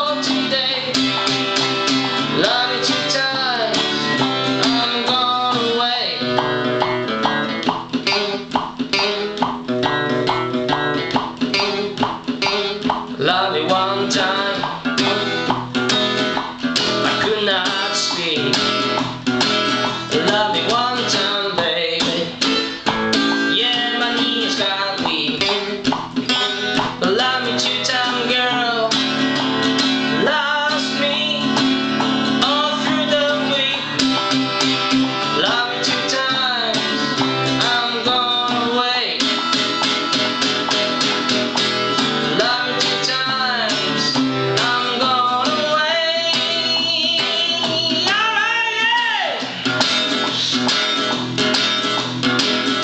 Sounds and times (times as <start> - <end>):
Acoustic guitar: 0.0 - 52.8
Strum: 0.0 - 52.8.